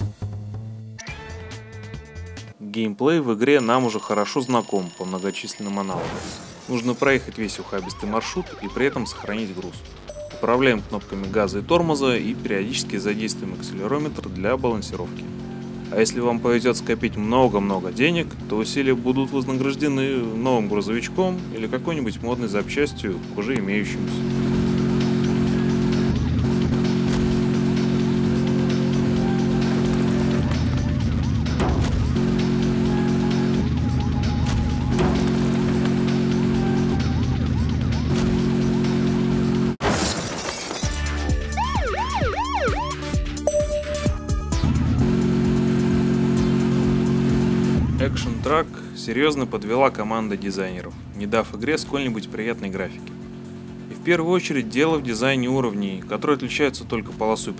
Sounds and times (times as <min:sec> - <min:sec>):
Music: 0:00.0 - 0:02.6, 0:03.6 - 0:39.8, 0:40.7 - 0:57.5
Speech: 0:02.6 - 0:06.1, 0:06.7 - 0:09.8, 0:10.4 - 0:15.1, 0:15.9 - 0:24.2, 0:48.0 - 0:53.1, 0:53.9 - 0:57.5.